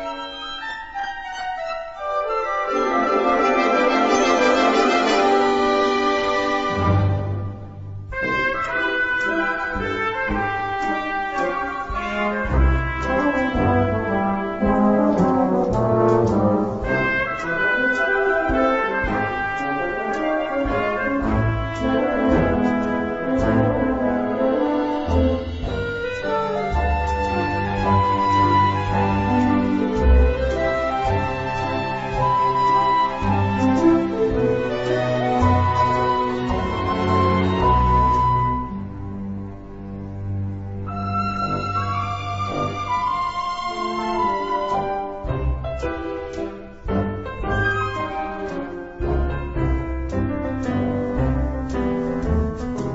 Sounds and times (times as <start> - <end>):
French horn: 0.0 - 45.7.